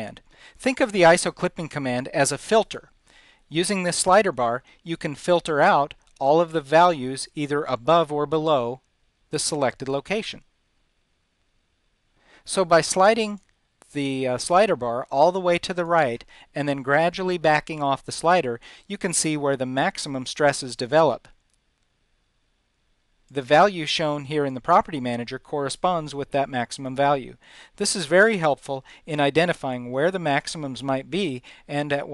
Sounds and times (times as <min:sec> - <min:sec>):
Speech: 0:00.0 - 0:02.9, 0:03.5 - 0:10.5, 0:12.5 - 0:21.4, 0:23.3 - 0:32.1.